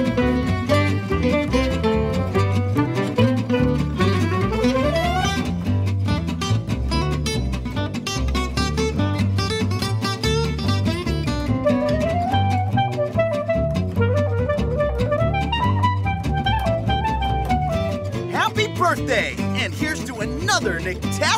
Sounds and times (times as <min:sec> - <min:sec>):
Music: 0:00.0 - 0:21.3
Speech: 0:18.3 - 0:21.3.